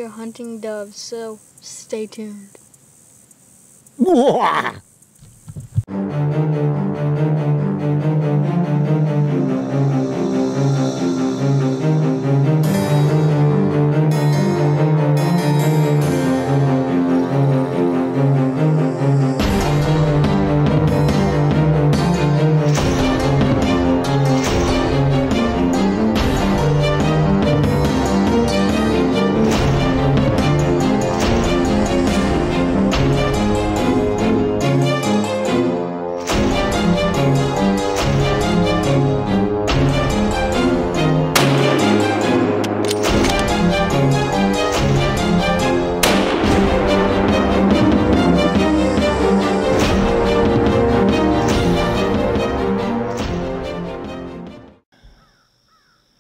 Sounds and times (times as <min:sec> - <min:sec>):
Music: 0:05.9 - 0:54.9.